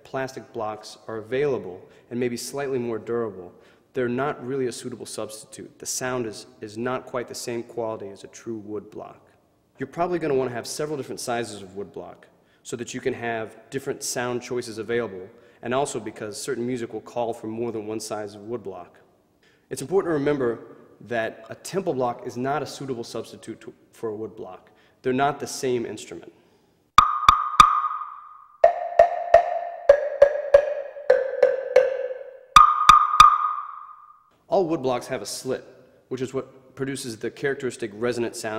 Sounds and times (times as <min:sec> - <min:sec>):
Speech: 0:00.0 - 0:19.1, 0:19.7 - 0:26.4, 0:34.5 - 0:38.5.